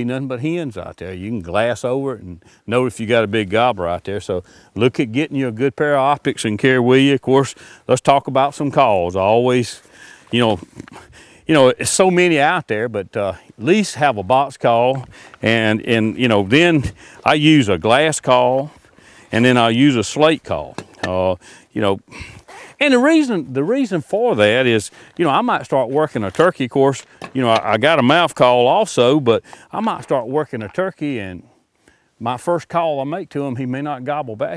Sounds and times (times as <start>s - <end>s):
Speech: 0.0s - 10.9s, 11.5s - 22.1s, 22.8s - 31.5s, 32.2s - 34.5s
Outside, rural or natural: 0.0s - 34.5s.